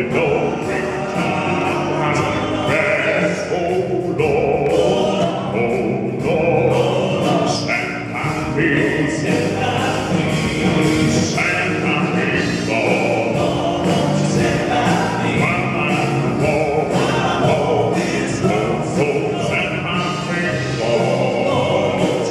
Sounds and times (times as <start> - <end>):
Music: 0.0 - 22.3.